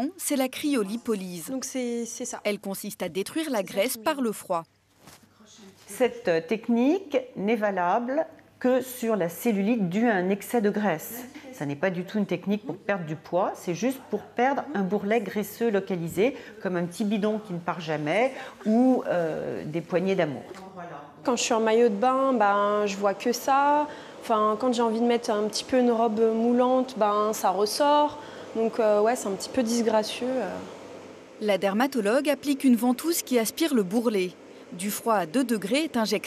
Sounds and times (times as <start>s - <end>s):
Speech: 0.0s - 4.7s, 5.4s - 30.6s, 31.4s - 36.2s.